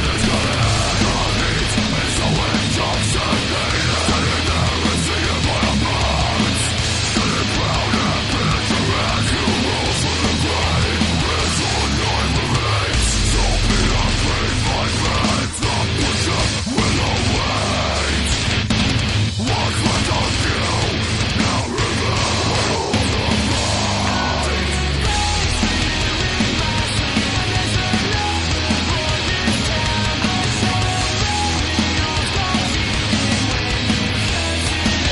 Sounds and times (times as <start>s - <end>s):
Music: 0.0s - 35.1s.